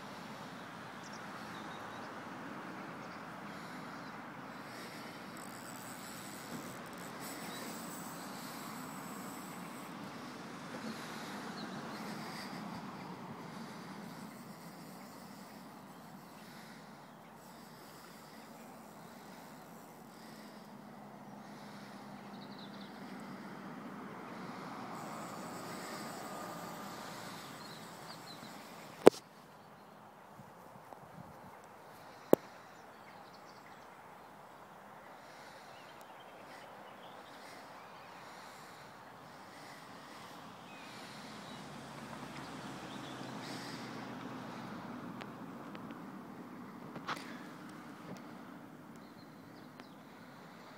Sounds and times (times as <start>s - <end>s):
Outside, rural or natural: 0.0s - 50.7s
Animal: 24.3s - 29.1s.